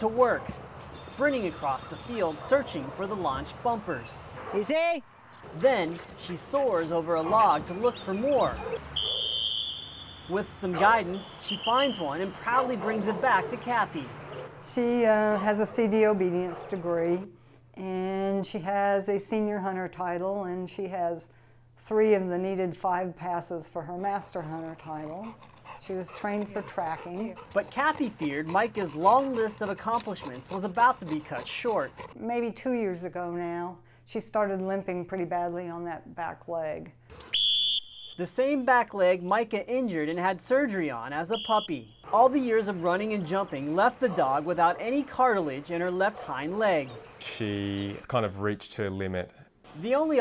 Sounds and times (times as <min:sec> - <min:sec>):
Yip: 0:08.6 - 0:09.4.